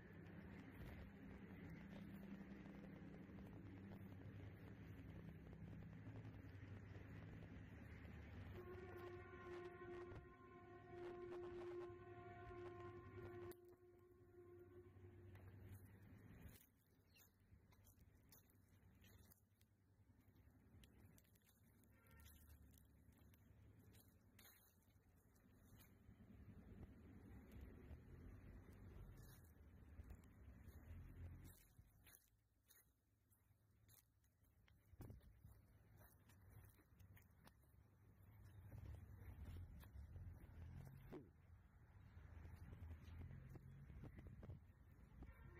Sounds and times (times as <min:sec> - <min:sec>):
Outside, rural or natural: 0:00.0 - 0:45.5
Chewing, mastication: 0:15.2 - 0:45.0.